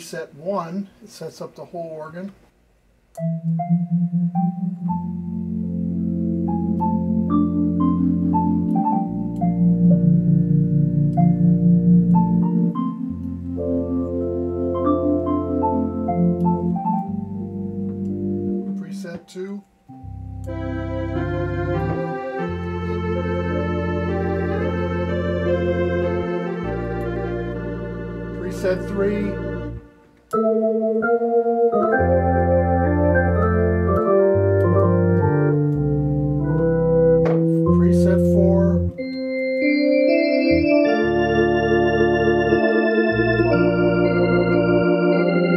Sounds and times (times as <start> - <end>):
Speech: 0.0 - 2.4, 18.7 - 19.7, 28.4 - 29.4, 37.6 - 38.9
Music: 3.1 - 19.2, 19.9 - 45.5.